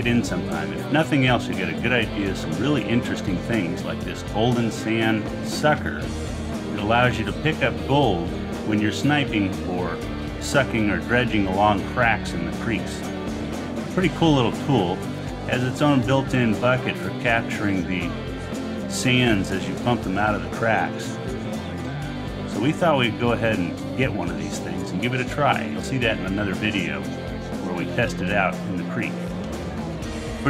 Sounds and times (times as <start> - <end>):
Speech: 0.0 - 6.1, 6.7 - 13.1, 13.9 - 21.3, 22.5 - 29.2
Music: 0.0 - 30.5.